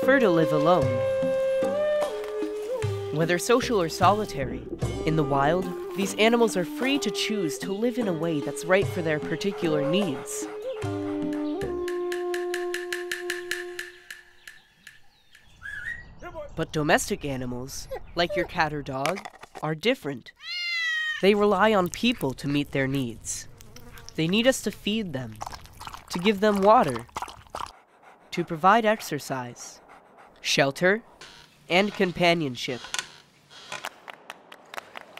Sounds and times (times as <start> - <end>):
Chirp, tweet: 14.4 - 16.6.